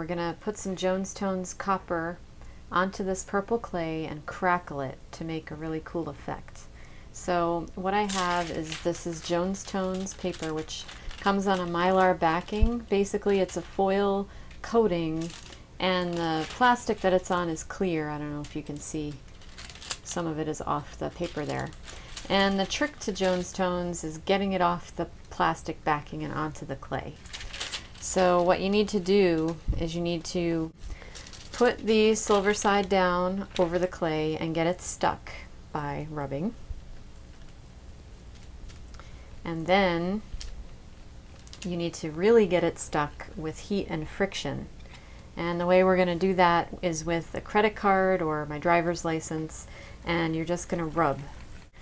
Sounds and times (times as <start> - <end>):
Speech: 0.0 - 19.2, 20.0 - 27.2, 28.0 - 30.8, 31.6 - 36.6, 39.4 - 40.2, 41.6 - 44.7, 45.4 - 51.4
Crackle: 7.6 - 24.1, 26.9 - 29.7, 30.8 - 33.9, 38.2 - 39.3, 40.2 - 41.8, 49.5 - 51.8.